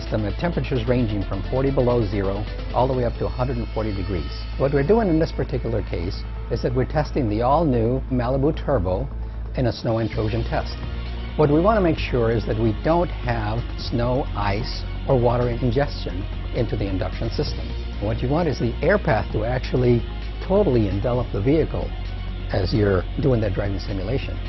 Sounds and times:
Speech: 0.0s - 10.8s, 11.4s - 21.9s, 22.5s - 24.4s
Music: 0.0s - 24.4s.

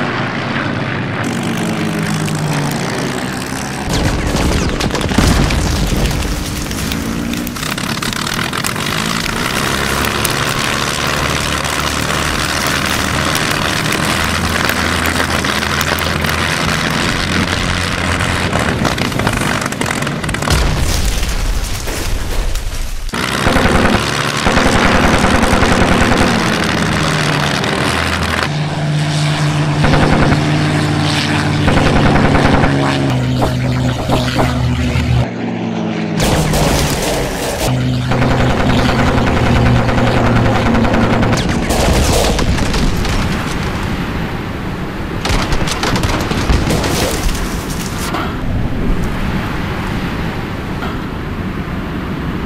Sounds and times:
Fixed-wing aircraft, airplane: 0.0s - 52.4s.

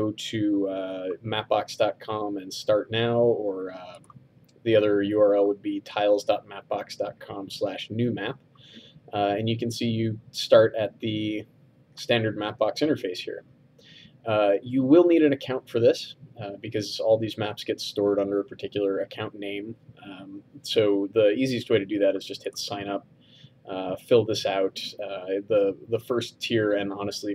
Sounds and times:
Speech: 0.0s - 4.1s, 4.7s - 8.4s, 9.1s - 11.4s, 12.0s - 13.4s, 14.3s - 23.0s, 23.7s - 27.3s.

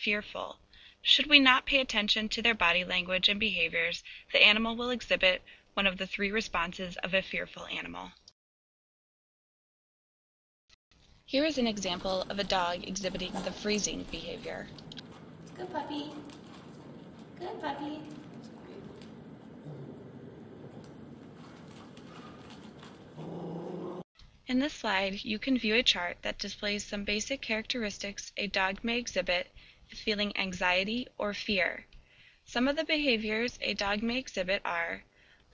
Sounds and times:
Speech: 0.0s - 8.2s, 11.3s - 14.7s, 15.6s - 16.3s, 17.4s - 21.0s, 24.5s - 31.8s, 32.5s - 35.0s.

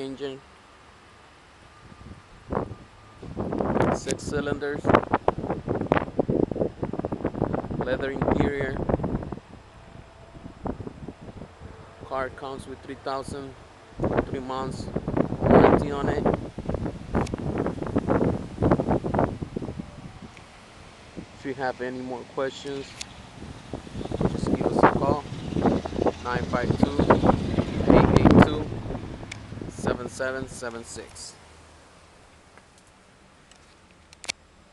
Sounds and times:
Speech: 0.0s - 0.4s, 3.9s - 4.9s, 7.8s - 8.8s, 12.1s - 13.6s, 14.3s - 14.9s, 15.6s - 16.3s, 21.4s - 22.9s, 24.4s - 25.3s, 26.2s - 27.1s, 27.9s - 28.7s, 29.7s - 31.4s.

